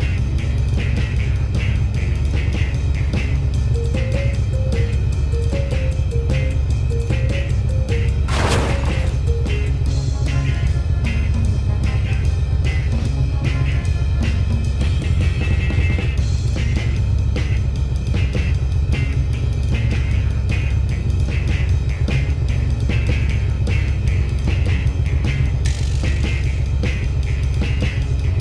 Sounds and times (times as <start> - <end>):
Music: 0.0 - 28.4.